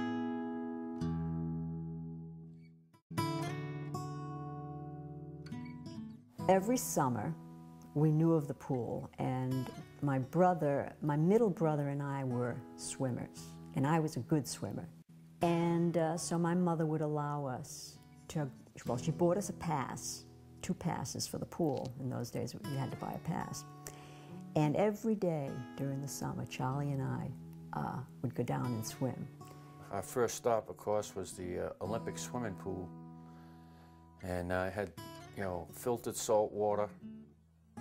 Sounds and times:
Music: 0.0 - 37.8
Speech: 6.5 - 7.4, 8.0 - 23.6, 24.6 - 29.3, 29.9 - 32.9, 34.2 - 37.0.

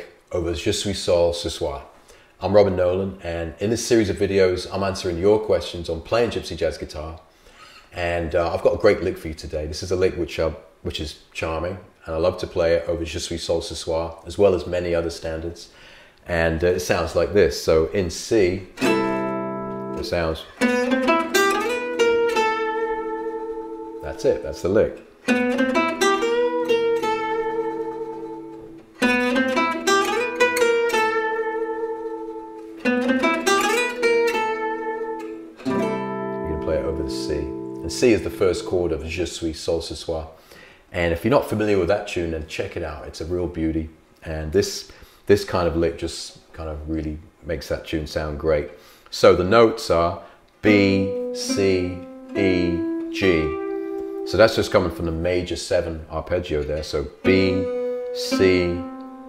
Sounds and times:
Speech: 0.0 - 7.3, 8.0 - 18.8, 20.0 - 20.6, 24.0 - 25.0, 36.4 - 53.6, 54.3 - 58.9
Acoustic guitar: 18.6 - 39.1, 50.7 - 55.5, 56.8 - 59.2
Strum: 18.6 - 39.2, 50.7 - 55.6, 56.6 - 59.2.

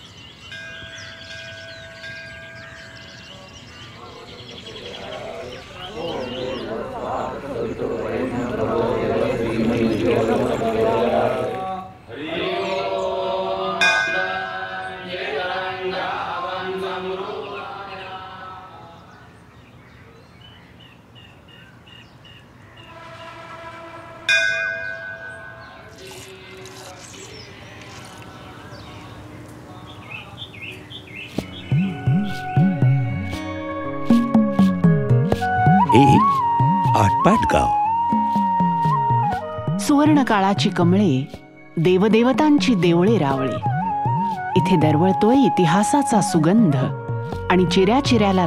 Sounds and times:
Chirp, tweet: 0.0 - 8.6, 17.4 - 18.3, 18.9 - 23.0, 27.0 - 31.9.

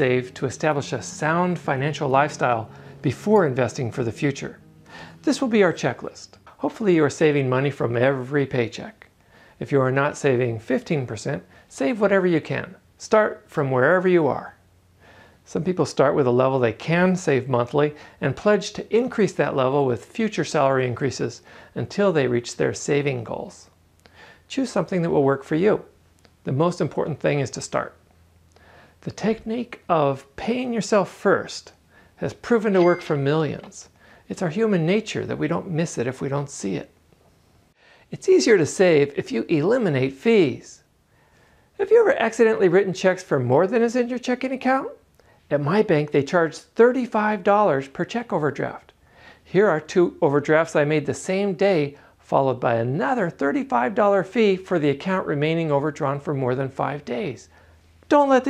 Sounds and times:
Speech: 0.0 - 14.6, 15.4 - 23.8, 24.5 - 28.0, 29.0 - 37.0, 38.1 - 40.9, 41.8 - 58.4.

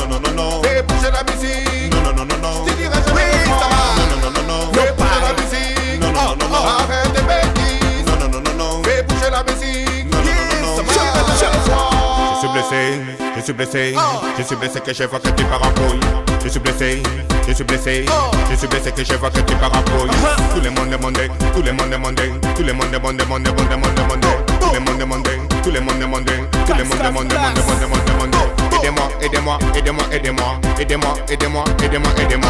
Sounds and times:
Exciting music: 0.0 - 32.4.

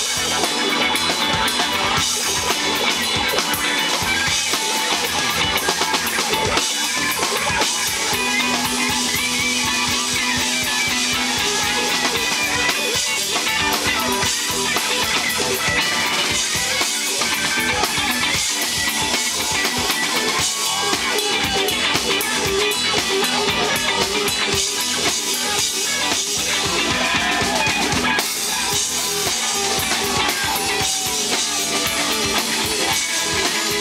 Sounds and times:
Music: 0.0 - 33.8.

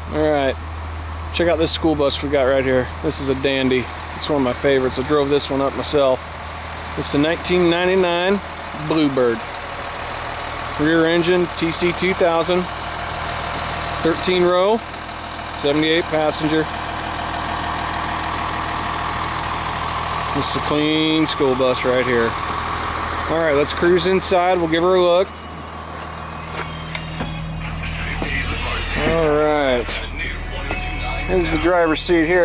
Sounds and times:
Speech: 0.0 - 0.6, 1.3 - 6.2, 7.0 - 9.4, 10.8 - 12.7, 14.0 - 14.9, 15.6 - 16.8, 20.3 - 22.4, 23.3 - 25.3, 27.6 - 32.4
Vehicle: 0.0 - 32.4
Music: 26.6 - 32.2.

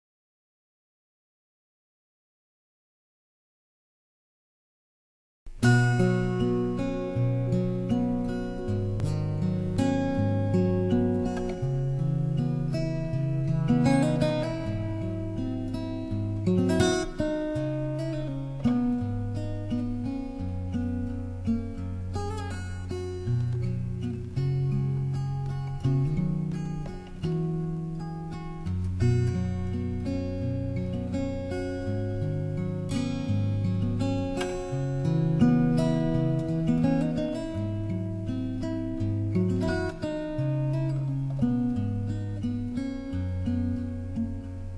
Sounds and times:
Acoustic guitar: 5.5 - 44.7.

